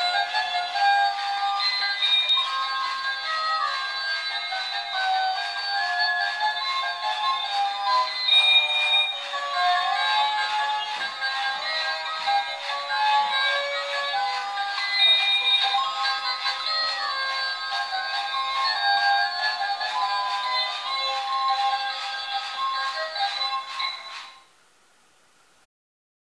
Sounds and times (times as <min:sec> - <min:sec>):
Music: 0:00.0 - 0:24.5.